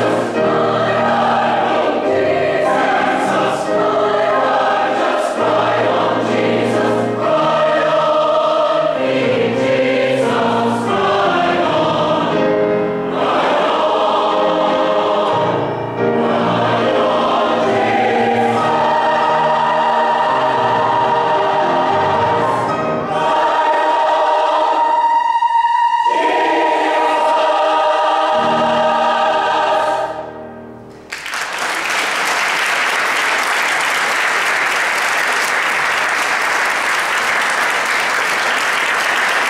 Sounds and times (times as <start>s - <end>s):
Choir: 0.0s - 30.6s
Classical music: 0.0s - 34.2s.